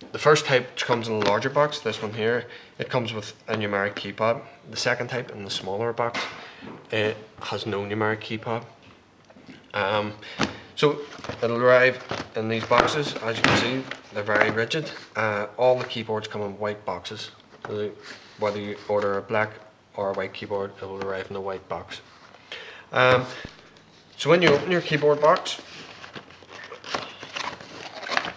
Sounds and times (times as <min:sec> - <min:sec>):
Speech: 0:00.1 - 0:08.8, 0:09.7 - 0:10.2, 0:10.8 - 0:22.1, 0:23.0 - 0:23.4, 0:24.2 - 0:25.7.